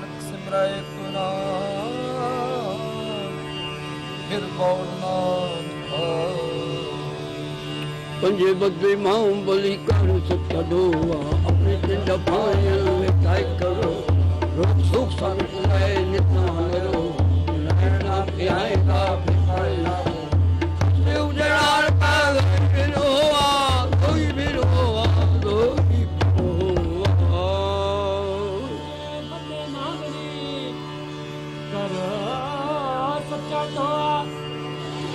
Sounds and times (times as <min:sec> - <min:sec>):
Carnatic music: 0:00.0 - 0:35.1.